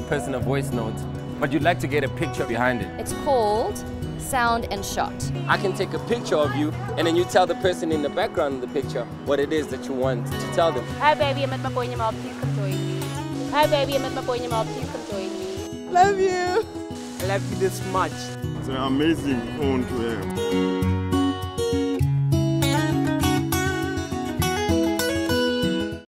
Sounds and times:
Music: 0.0s - 26.0s.

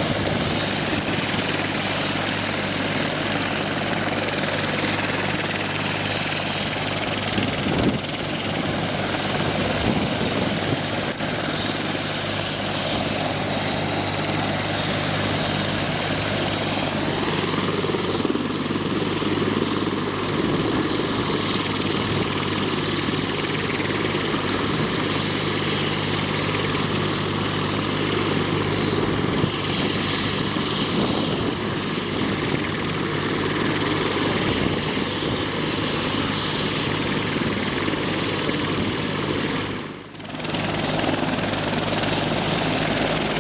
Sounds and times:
Helicopter: 0.0s - 43.4s.

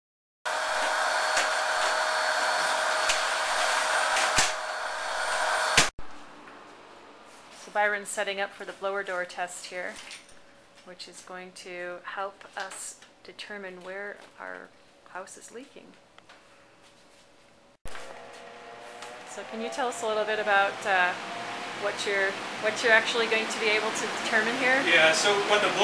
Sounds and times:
Speech: 7.7s - 10.0s, 10.8s - 16.0s, 19.4s - 21.2s, 21.8s - 25.8s.

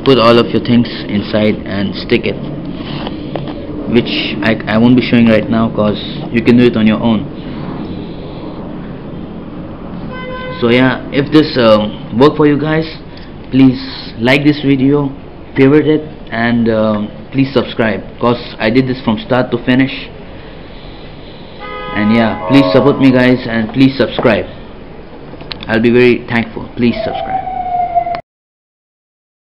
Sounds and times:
Speech: 0.0s - 2.4s, 3.9s - 7.3s, 10.6s - 20.1s, 22.0s - 24.5s, 25.6s - 27.4s.

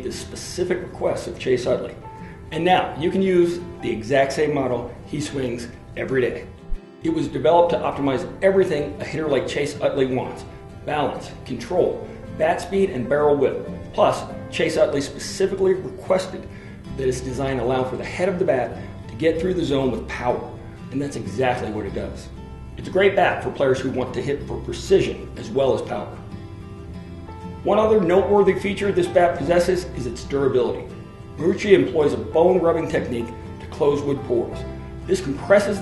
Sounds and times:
Speech: 0.0s - 26.2s, 27.6s - 35.8s
Music: 0.0s - 35.8s.

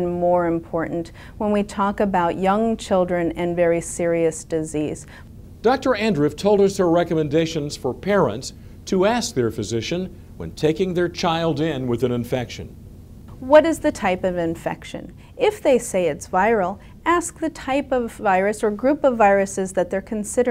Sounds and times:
Speech: 0.0s - 5.0s, 5.7s - 12.7s, 13.4s - 20.5s
Inside, small room: 0.0s - 20.5s.

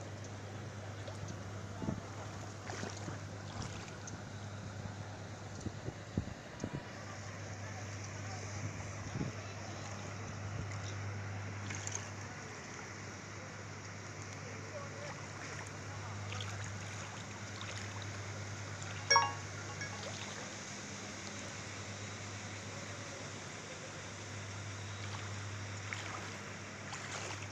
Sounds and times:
Outside, urban or manmade: 0.0s - 27.5s.

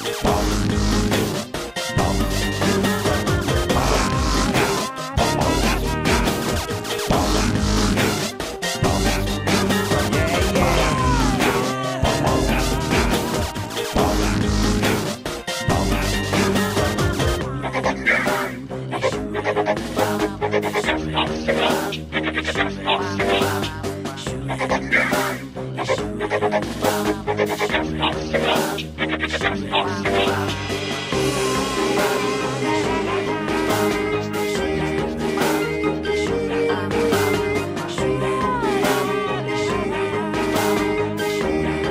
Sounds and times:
Music: 0.0s - 41.9s.

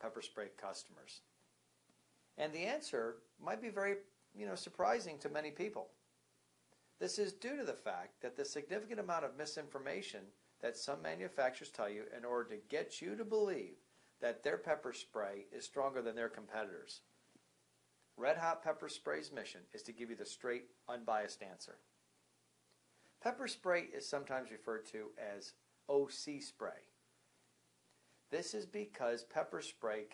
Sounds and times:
Speech: 0.0s - 1.3s, 2.4s - 6.0s, 7.0s - 17.1s, 18.2s - 21.9s, 23.2s - 27.0s, 28.3s - 30.1s.

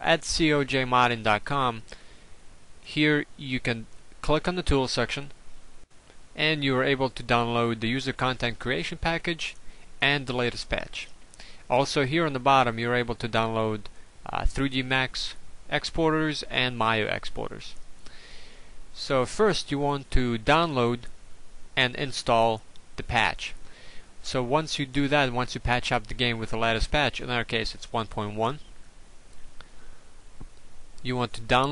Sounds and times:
Speech: 0.0s - 1.9s, 2.9s - 5.4s, 6.4s - 11.1s, 11.7s - 17.8s, 19.0s - 21.1s, 21.8s - 23.6s, 24.2s - 28.7s, 31.0s - 31.7s.

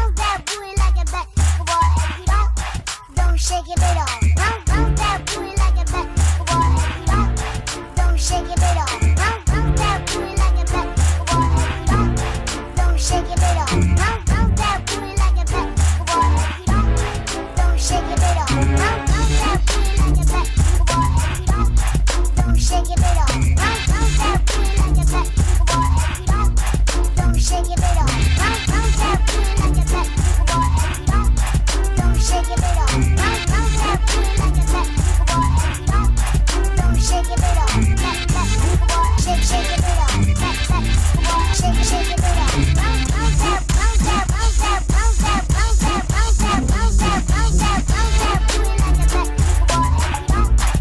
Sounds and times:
Hip hop music: 0.0s - 50.8s.

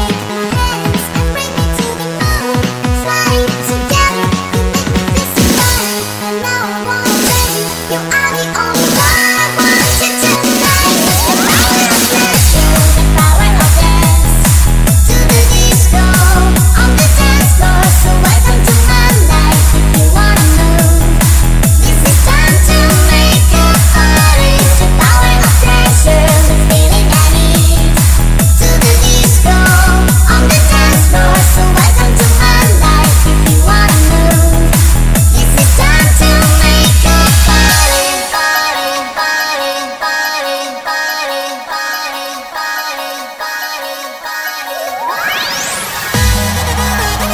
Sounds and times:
Music: 0.0s - 47.3s.

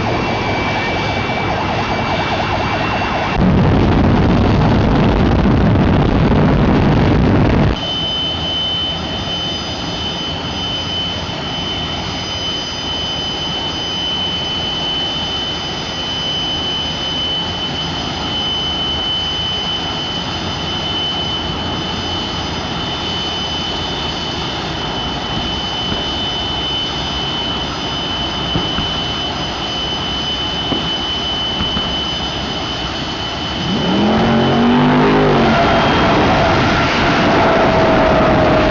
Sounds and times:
Vehicle: 0.0s - 38.7s.

